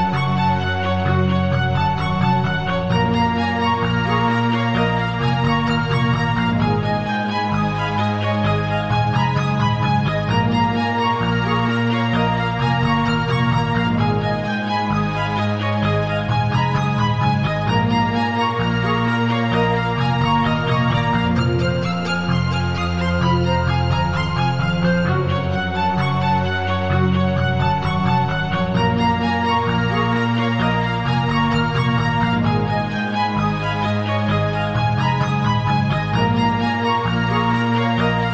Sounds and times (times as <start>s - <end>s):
Theme music: 0.0s - 38.3s.